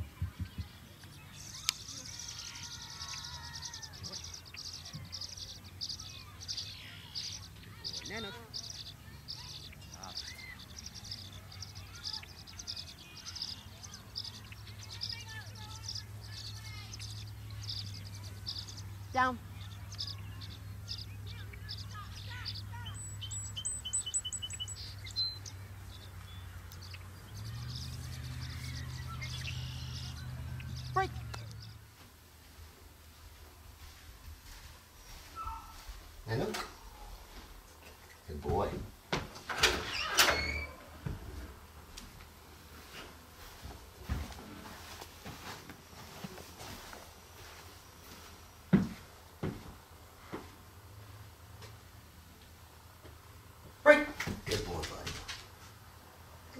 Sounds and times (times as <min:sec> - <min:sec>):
Outside, rural or natural: 0:00.0 - 0:56.5.